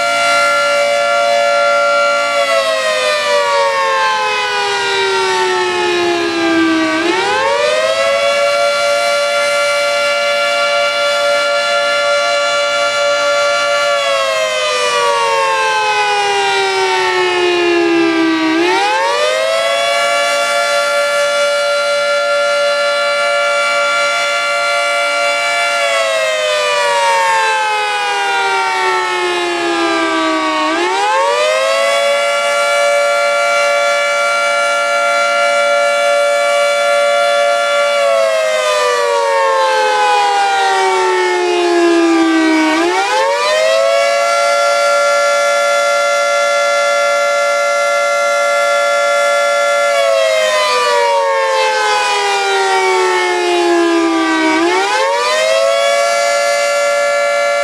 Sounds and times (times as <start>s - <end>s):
Siren: 0.0s - 57.6s.